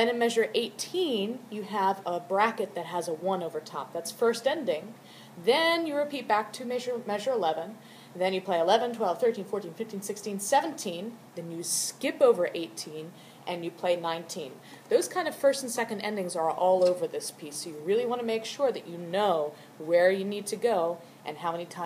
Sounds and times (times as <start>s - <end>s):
Speech: 0.0s - 21.8s.